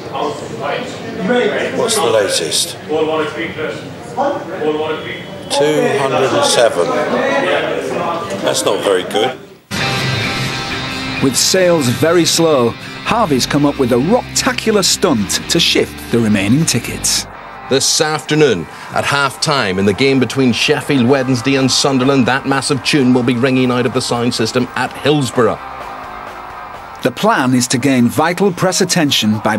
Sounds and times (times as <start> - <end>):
Speech: 0.0 - 9.5, 11.2 - 25.6, 27.0 - 29.5.